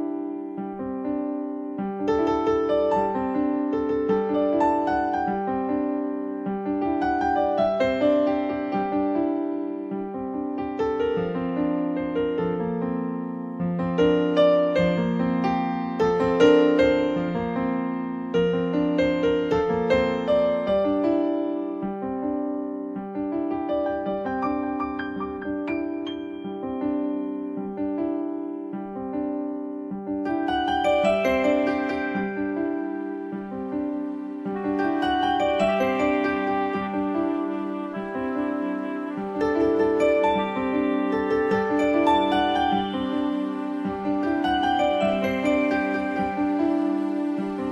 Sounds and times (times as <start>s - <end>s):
New-age music: 0.0s - 47.7s.